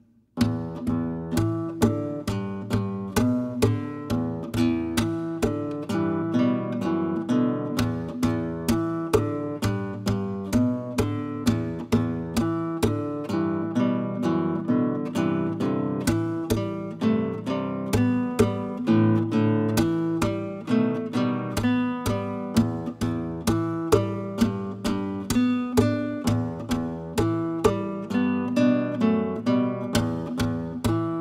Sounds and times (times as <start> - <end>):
Guitar: 0.0 - 31.2.